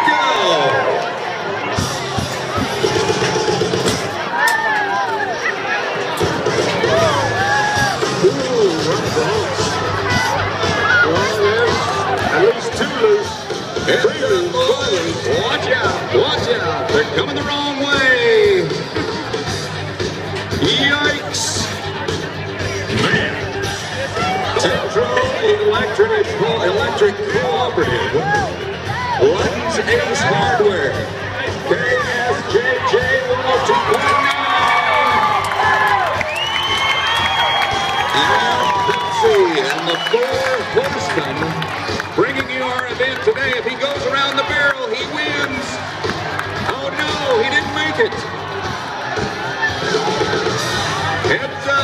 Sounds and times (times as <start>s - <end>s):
Music: 0.0s - 51.8s
Speech: 8.2s - 18.9s, 20.6s - 28.5s, 29.2s - 35.2s, 38.2s - 41.6s, 42.2s - 45.8s, 46.6s - 48.3s, 51.2s - 51.8s.